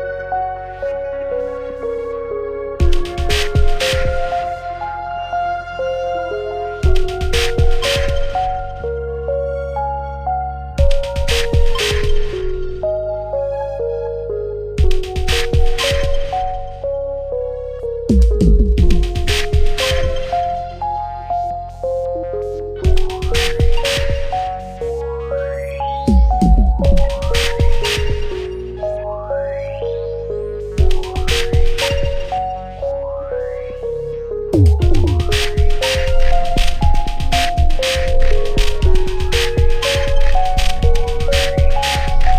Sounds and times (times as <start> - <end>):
Drum machine: 2.8 - 4.5, 6.8 - 8.7, 10.8 - 12.8, 14.8 - 16.7, 18.1 - 20.6, 22.8 - 24.6, 26.1 - 28.6, 30.8 - 32.4, 34.6 - 42.3.